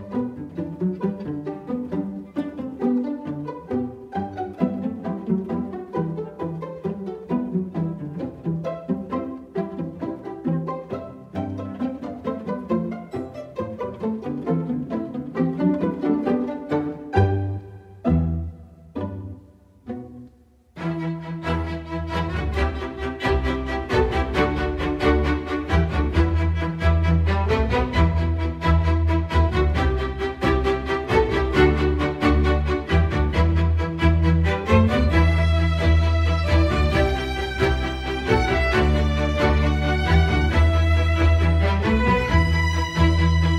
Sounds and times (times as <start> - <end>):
Music: 0.0 - 43.5.